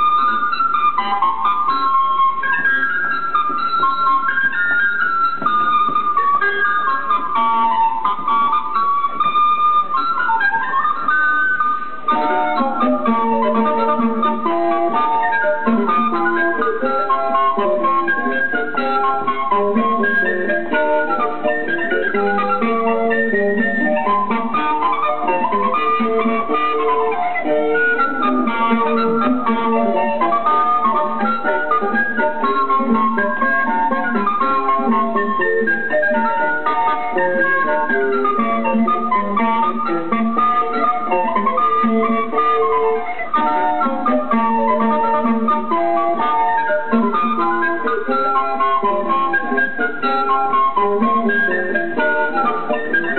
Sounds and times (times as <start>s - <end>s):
Flute: 0.0s - 53.1s.